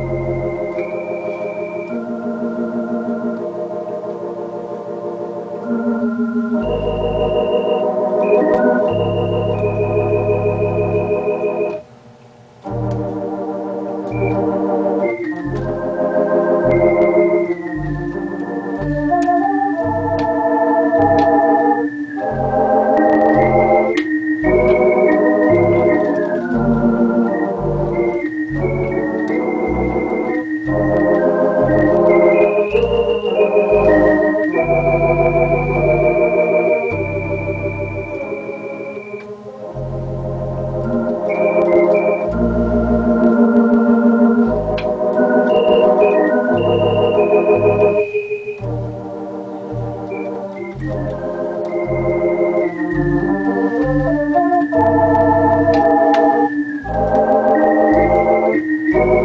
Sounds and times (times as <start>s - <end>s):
Electronic organ: 0.0s - 59.2s.